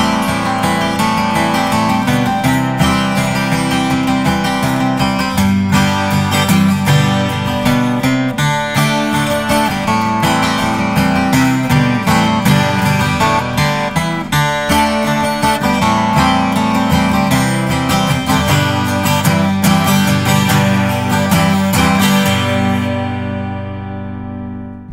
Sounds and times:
Acoustic guitar: 0:00.0 - 0:24.9
Strum: 0:00.0 - 0:24.9.

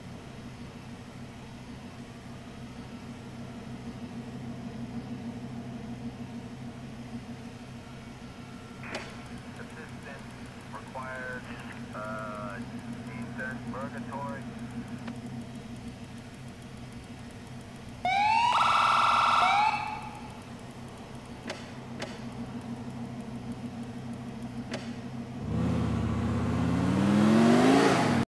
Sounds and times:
Car: 0:00.0 - 0:28.3.

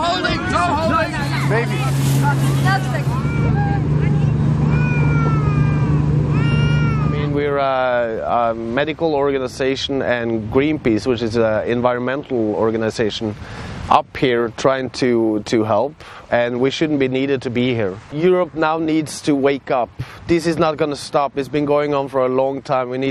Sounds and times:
Motorboat, speedboat: 0:00.0 - 0:11.6
Speech: 0:07.2 - 0:23.1.

